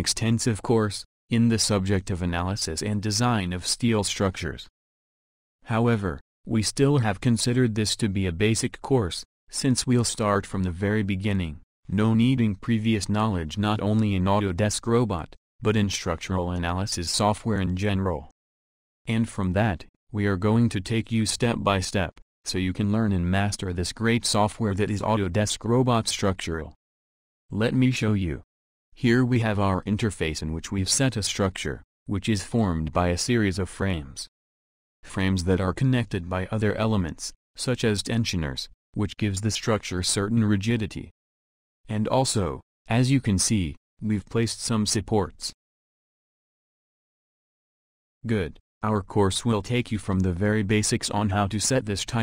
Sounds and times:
Speech: 0:00.0 - 0:04.7, 0:05.6 - 0:18.4, 0:19.1 - 0:26.8, 0:27.5 - 0:34.3, 0:35.1 - 0:41.2, 0:41.9 - 0:45.6, 0:48.2 - 0:52.2.

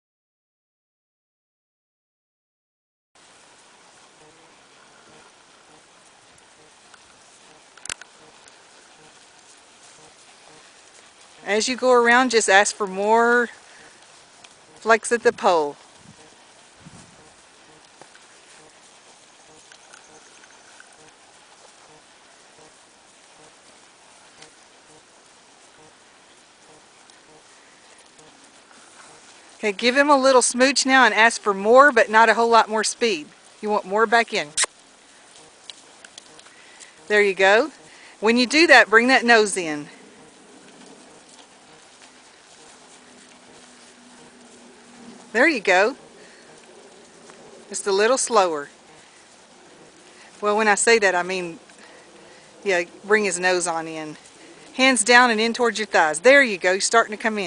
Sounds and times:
Clip-clop: 0:03.2 - 0:57.4
Speech: 0:11.4 - 0:13.6, 0:14.8 - 0:15.8, 0:29.6 - 0:34.7, 0:37.1 - 0:39.9, 0:45.4 - 0:46.0, 0:47.7 - 0:48.7, 0:50.4 - 0:51.6, 0:52.7 - 0:54.2, 0:54.8 - 0:57.4.

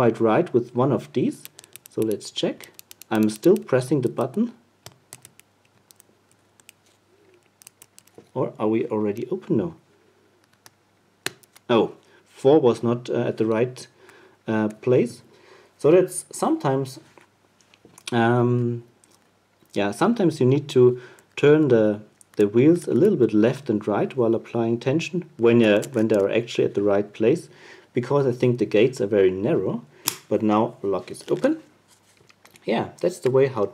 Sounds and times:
Speech: 0:00.0 - 0:04.6, 0:08.4 - 0:09.8, 0:11.7 - 0:13.9, 0:14.5 - 0:17.1, 0:18.1 - 0:18.9, 0:19.8 - 0:31.7, 0:32.6 - 0:33.7.

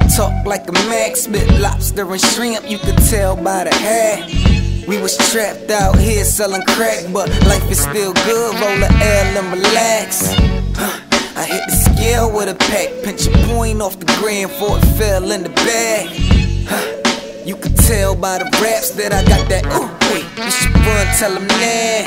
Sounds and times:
Music: 0:00.0 - 0:22.0.

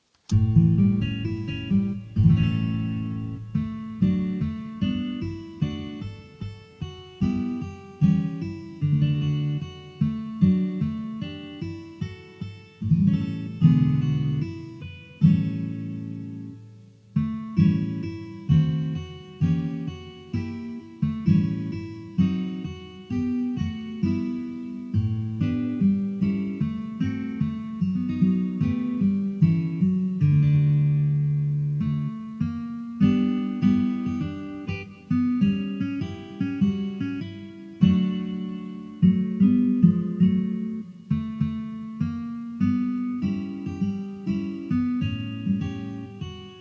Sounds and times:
Acoustic guitar: 0:00.0 - 0:46.6.

